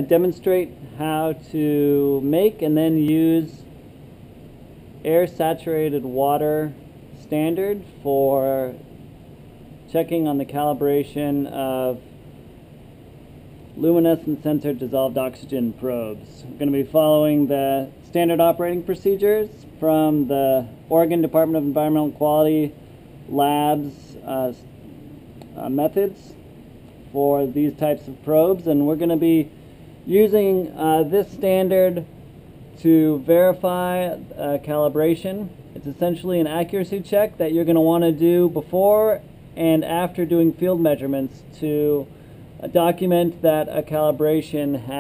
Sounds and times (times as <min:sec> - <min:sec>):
Speech: 0:00.0 - 0:03.7, 0:05.0 - 0:08.8, 0:09.9 - 0:12.0, 0:13.8 - 0:24.7, 0:25.5 - 0:26.4, 0:27.1 - 0:29.5, 0:30.1 - 0:32.1, 0:32.8 - 0:45.0.